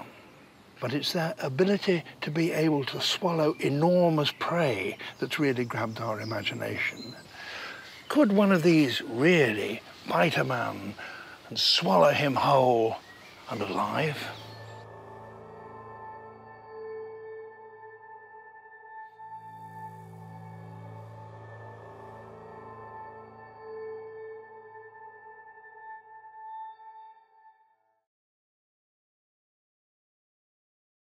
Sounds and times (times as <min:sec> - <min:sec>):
Outside, rural or natural: 0:00.0 - 0:26.6
Speech: 0:00.8 - 0:07.3, 0:08.1 - 0:14.5
Music: 0:12.4 - 0:28.1.